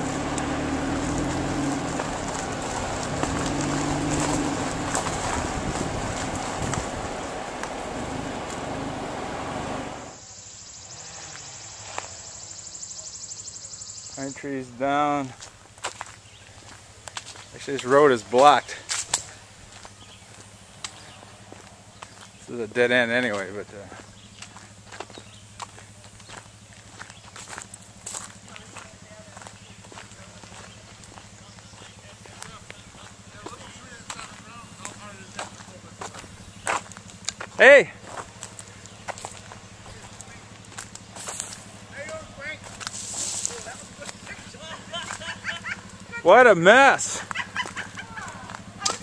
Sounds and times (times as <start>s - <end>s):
Speech: 14.2s - 15.3s, 17.5s - 18.8s, 22.5s - 24.0s, 28.4s - 36.3s, 37.5s - 38.0s, 39.8s - 40.6s, 41.9s - 42.7s, 43.4s - 45.2s, 46.2s - 47.2s.